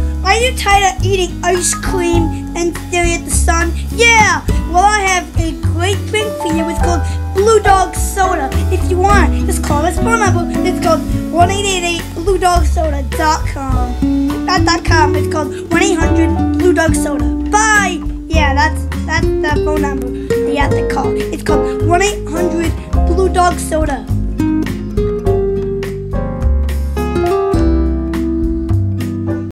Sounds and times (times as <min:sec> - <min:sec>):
Music: 0:00.0 - 0:29.5
Speech: 0:00.3 - 0:24.1.